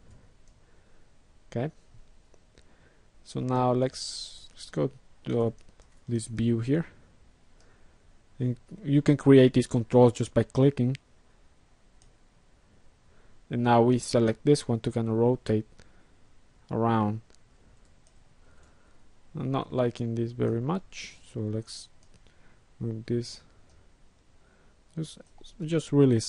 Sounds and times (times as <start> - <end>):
Speech: 1.5 - 1.8, 3.3 - 7.0, 8.4 - 11.0, 13.5 - 15.7, 16.7 - 17.3, 19.4 - 21.9, 22.8 - 23.5, 25.0 - 26.2.